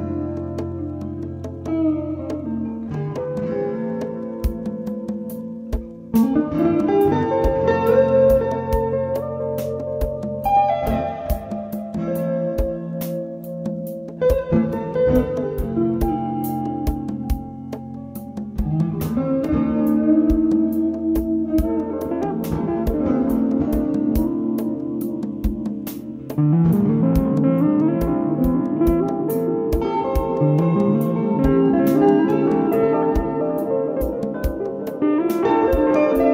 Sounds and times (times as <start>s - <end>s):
Music: 0.0s - 36.3s.